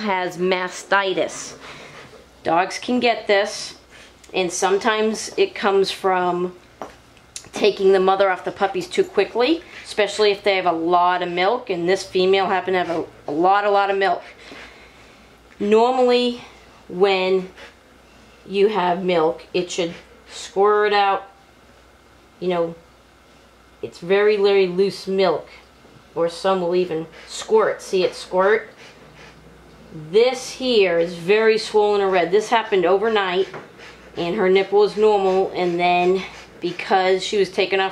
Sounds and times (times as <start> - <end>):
Speech: 0.0 - 1.6, 2.4 - 6.6, 7.4 - 14.4, 15.6 - 17.6, 18.5 - 21.4, 22.4 - 22.8, 23.8 - 25.6, 26.2 - 28.7, 29.9 - 33.6, 34.2 - 37.9.